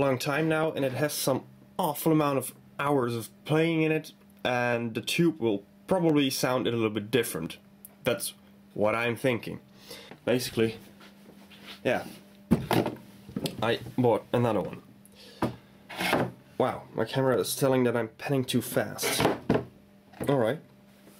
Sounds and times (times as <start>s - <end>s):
Speech: 0.0s - 9.6s, 10.2s - 10.8s, 11.8s - 12.2s, 13.5s - 14.9s, 16.6s - 19.3s, 20.2s - 20.7s.